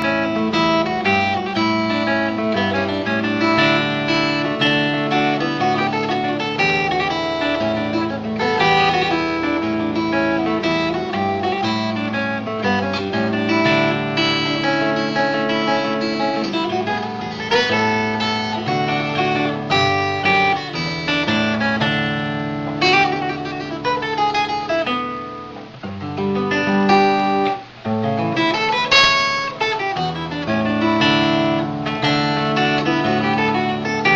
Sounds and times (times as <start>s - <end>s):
Strum: 0.0s - 34.1s.